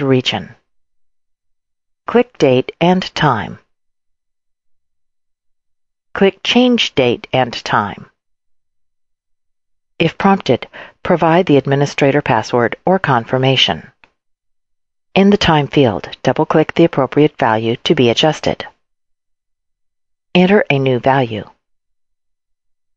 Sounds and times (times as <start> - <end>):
Speech: 0.0 - 0.6, 2.1 - 3.6, 6.2 - 8.1, 10.0 - 14.0, 15.2 - 18.7, 20.4 - 21.6.